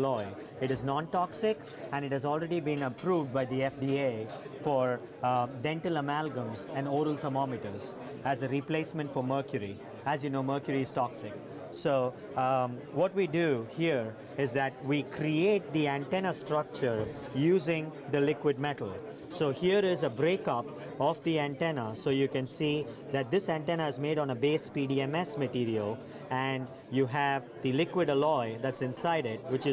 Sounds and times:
Speech: 0.0 - 29.7.

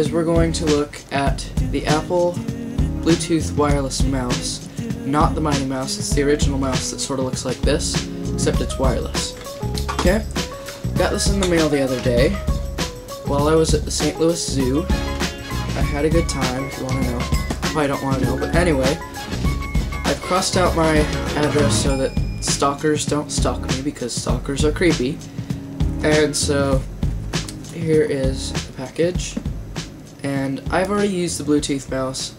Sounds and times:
Speech: 0.0 - 2.4, 3.0 - 9.4, 10.0 - 10.3, 11.0 - 12.4, 13.3 - 14.9, 15.8 - 19.0, 20.1 - 25.2, 26.0 - 26.9, 27.7 - 29.4, 30.2 - 32.3
Music: 0.0 - 32.3.

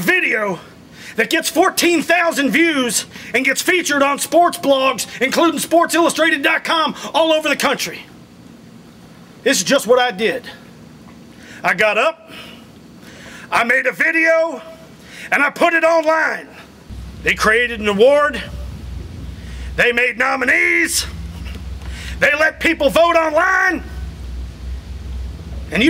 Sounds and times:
Male speech, man speaking: 0.0 - 8.1, 9.4 - 10.6, 11.6 - 12.3, 13.5 - 18.6, 19.7 - 21.2, 22.2 - 24.0, 25.7 - 25.8
Narration, monologue: 0.0 - 25.8.

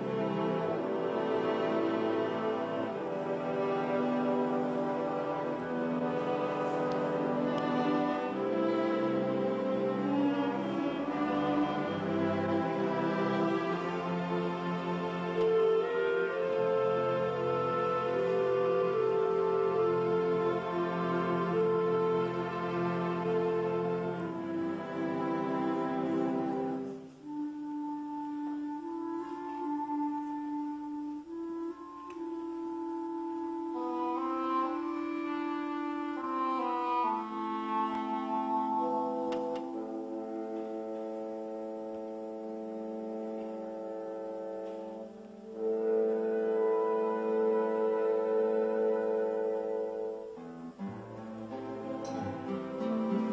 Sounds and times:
Orchestra: 0.0 - 53.3.

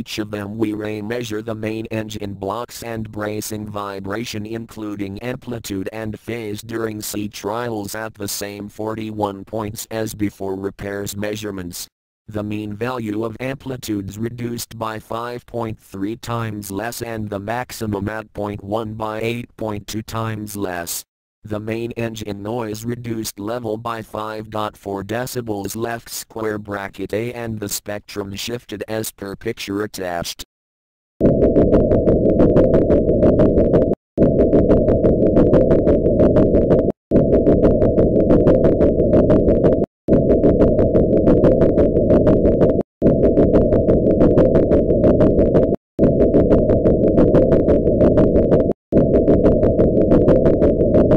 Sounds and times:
Speech: 0.0 - 30.5.

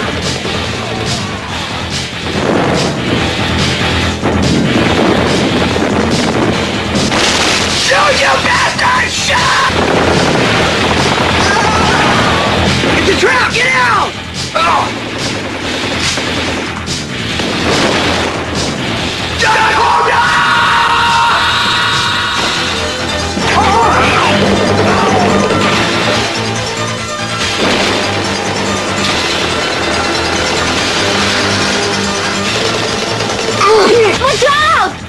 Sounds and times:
Speech: 7.8 - 9.8, 33.6 - 35.0.

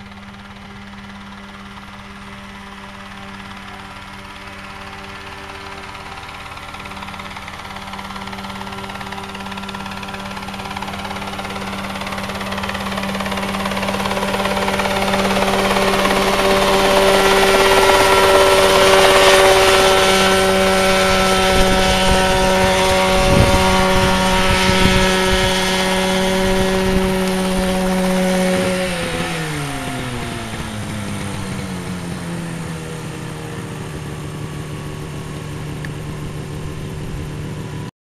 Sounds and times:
Helicopter: 0.0 - 37.9.

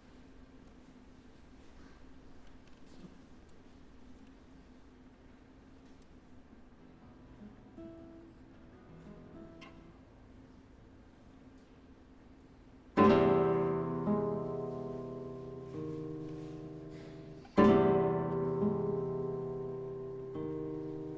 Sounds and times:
Strum: 13.0 - 21.1.

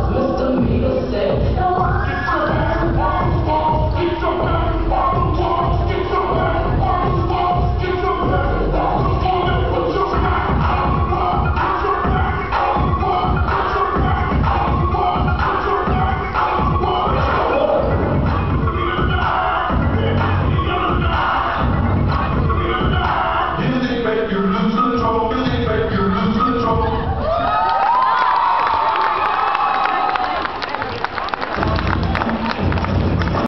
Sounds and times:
Crowd: 0.0 - 33.4
Cheering: 27.1 - 33.4.

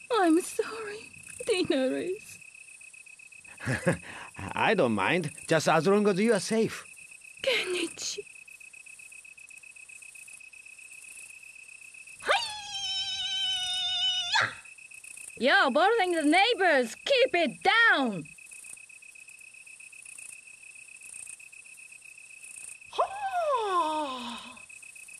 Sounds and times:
Speech: 0.1 - 2.3, 4.4 - 6.8, 15.4 - 18.3.

